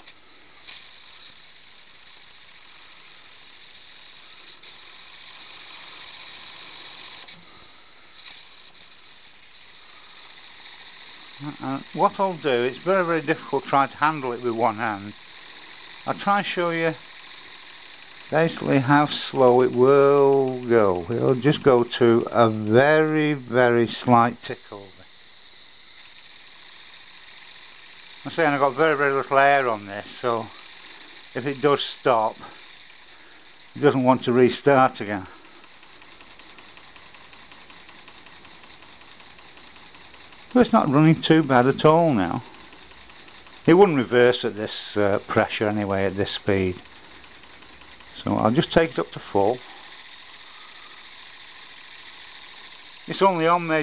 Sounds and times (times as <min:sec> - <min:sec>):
Engine: 0:00.0 - 0:53.8
Speech: 0:11.4 - 0:15.2, 0:16.1 - 0:17.0, 0:18.4 - 0:25.0, 0:28.3 - 0:30.6, 0:31.4 - 0:32.6, 0:33.8 - 0:35.3, 0:40.6 - 0:42.5, 0:43.7 - 0:46.8, 0:48.2 - 0:49.7, 0:53.1 - 0:53.8.